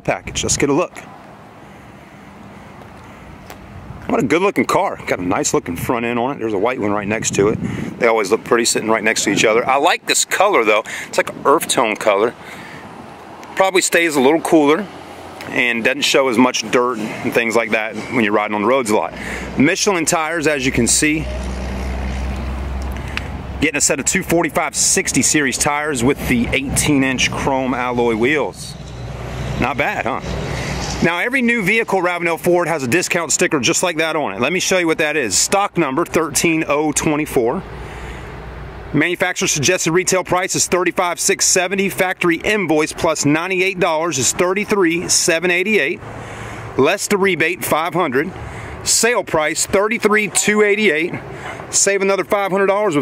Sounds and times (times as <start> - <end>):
Speech: 0.0 - 1.1, 4.1 - 12.4, 13.6 - 21.4, 23.6 - 28.8, 29.6 - 30.3, 31.0 - 37.7, 38.9 - 46.0, 46.8 - 53.0
Motor vehicle (road): 0.0 - 53.0.